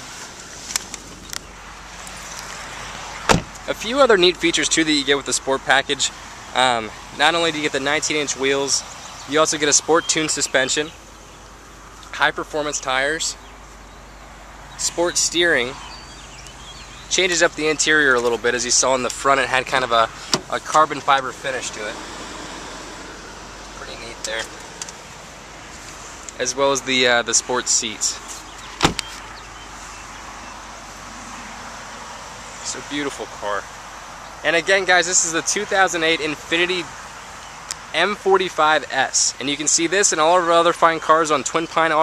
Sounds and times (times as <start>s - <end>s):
Outside, rural or natural: 0.0s - 42.0s
Speech: 3.6s - 11.0s, 12.1s - 13.4s, 14.8s - 15.8s, 17.1s - 22.0s, 23.8s - 24.6s, 26.4s - 28.2s, 32.6s - 33.7s, 34.4s - 37.0s, 37.7s - 42.0s.